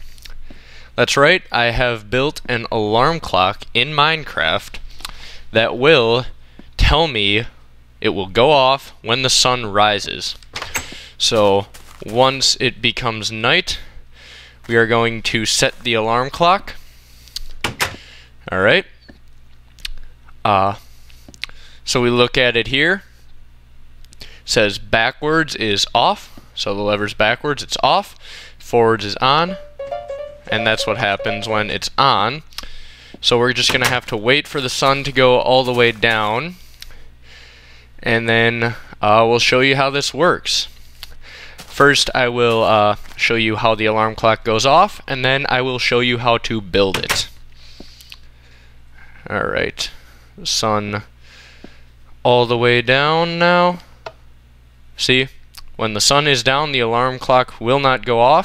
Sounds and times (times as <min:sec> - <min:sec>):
Speech: 0:01.0 - 0:04.8, 0:05.5 - 0:10.4, 0:11.2 - 0:13.9, 0:14.7 - 0:16.8, 0:18.5 - 0:19.0, 0:20.4 - 0:20.8, 0:21.9 - 0:23.1, 0:24.5 - 0:29.7, 0:30.5 - 0:32.5, 0:33.2 - 0:36.6, 0:38.0 - 0:40.7, 0:41.7 - 0:47.4, 0:49.2 - 0:51.1, 0:52.2 - 0:53.9, 0:55.0 - 0:58.4.